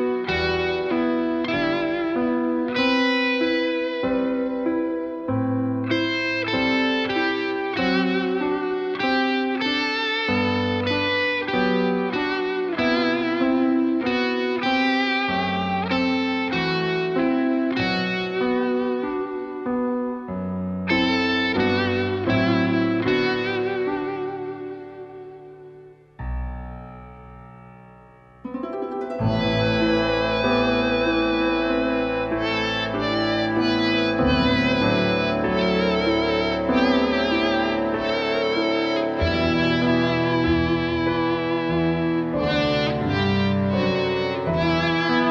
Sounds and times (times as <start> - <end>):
Electric guitar: 0.0 - 26.6, 28.6 - 45.3.